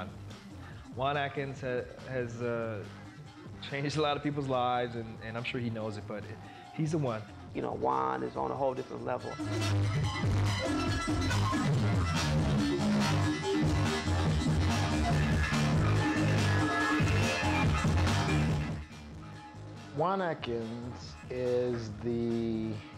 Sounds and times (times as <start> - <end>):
Soul music: 0.0 - 22.9
Techno: 0.0 - 22.9
Speech: 1.0 - 2.9, 3.6 - 9.4, 20.0 - 22.8.